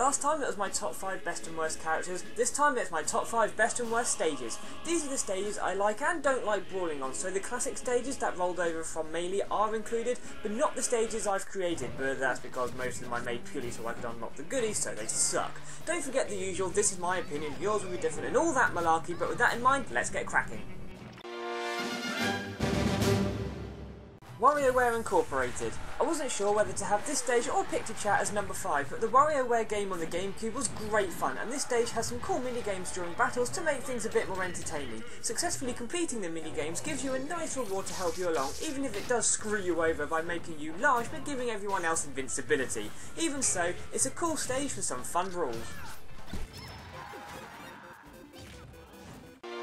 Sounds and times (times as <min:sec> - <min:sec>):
Speech: 0:00.0 - 0:20.8, 0:24.4 - 0:46.0
Music: 0:00.0 - 0:49.6.